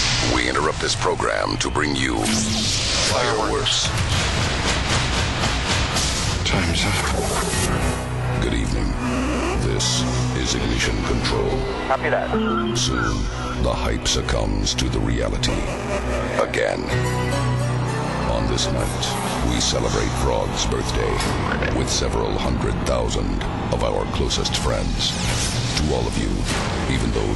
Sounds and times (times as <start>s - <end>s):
Speech: 0.2s - 3.9s, 6.4s - 7.4s, 8.4s - 9.0s, 9.6s - 15.7s, 16.4s - 17.0s, 18.3s - 27.3s
Music: 1.6s - 27.3s.